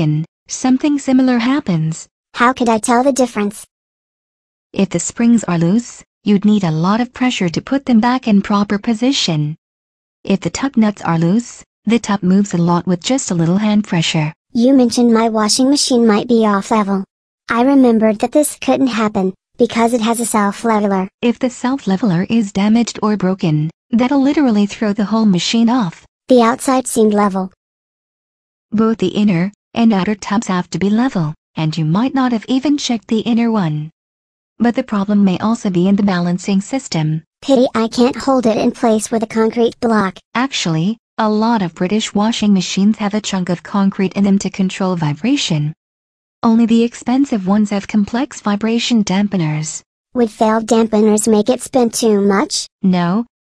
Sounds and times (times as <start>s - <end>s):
Speech: 0.0s - 3.7s, 4.8s - 9.6s, 10.3s - 27.6s, 28.8s - 34.0s, 34.6s - 45.8s, 46.4s - 53.3s.